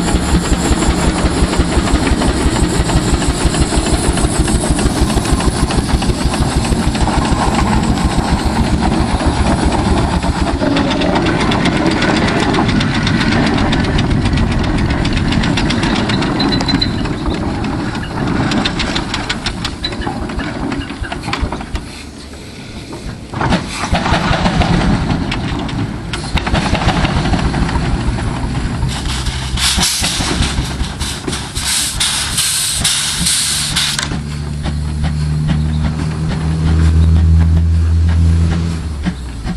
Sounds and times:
Heavy engine (low frequency): 0.0 - 39.5.

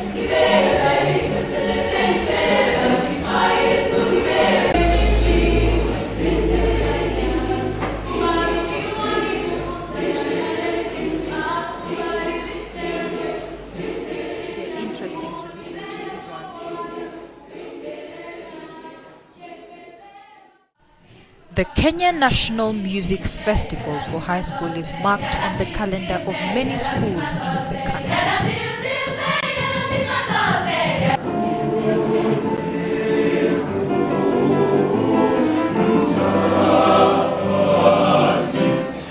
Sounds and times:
Music: 0.0 - 39.1
Speech: 14.8 - 16.6, 21.5 - 28.4.

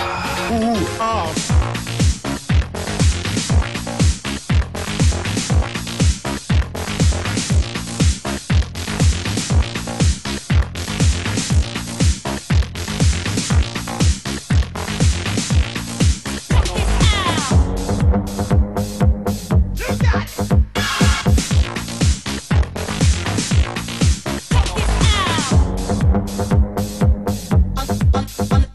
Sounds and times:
Music: 0.0 - 28.7.

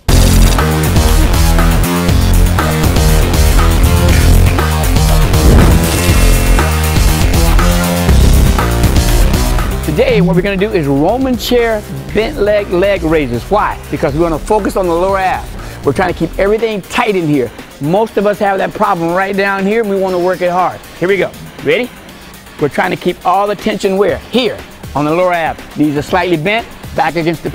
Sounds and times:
Music: 0.0 - 27.5
Speech: 9.8 - 21.9, 22.6 - 27.5.

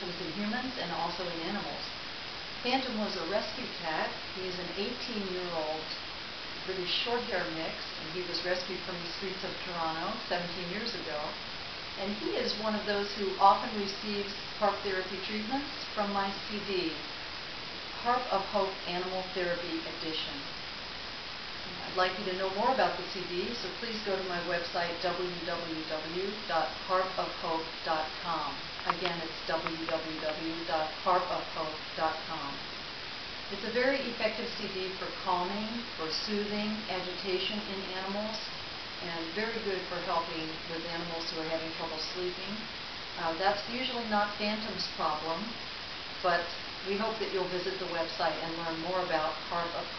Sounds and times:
Speech: 0.0 - 2.0, 2.6 - 6.0, 6.6 - 11.4, 12.0 - 17.1, 18.0 - 20.5, 21.7 - 32.6, 33.5 - 45.6, 46.2 - 49.9.

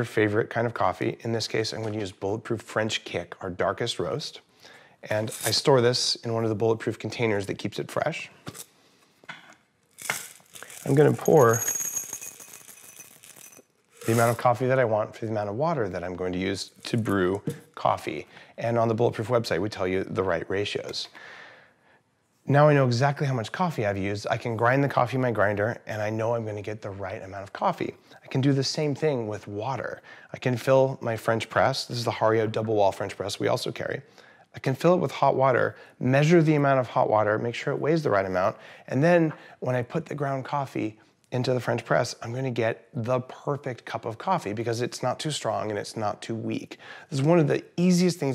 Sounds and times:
Speech: 0.0 - 8.4, 10.8 - 11.6, 14.1 - 21.2, 22.5 - 48.3.

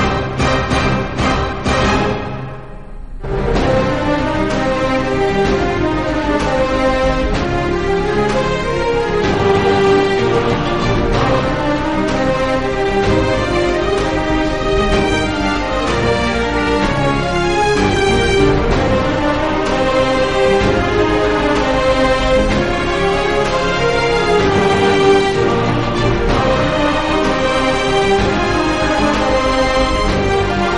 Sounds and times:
Theme music: 0.0 - 30.7.

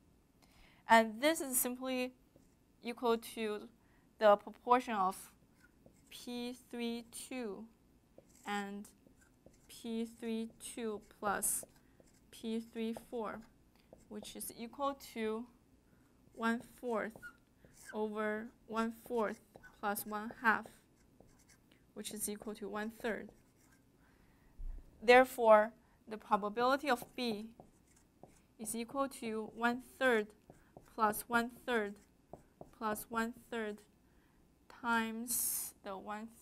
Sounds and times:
Speech: 0.9 - 2.2, 2.8 - 5.3, 6.2 - 7.7, 8.5 - 9.0, 9.7 - 11.7, 12.4 - 13.5, 14.1 - 15.5, 16.4 - 17.2, 17.9 - 20.8, 22.0 - 23.4, 25.0 - 27.6, 28.6 - 30.4, 31.0 - 32.0, 32.8 - 33.9, 34.7 - 36.4.

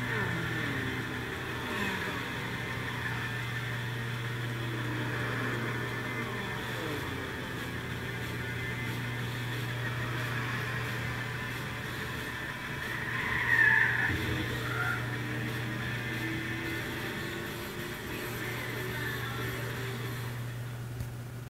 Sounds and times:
Music: 0.0 - 21.4.

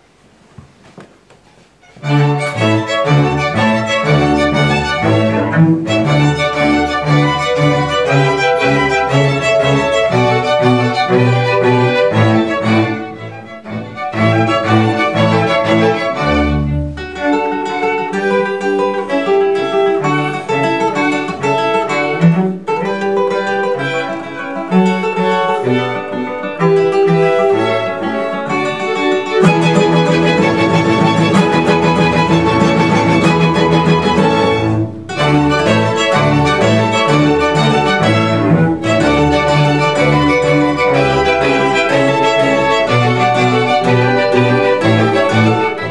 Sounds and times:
Acoustic guitar: 0.0 - 45.9
Strum: 0.0 - 45.9
Orchestra: 1.8 - 45.9.

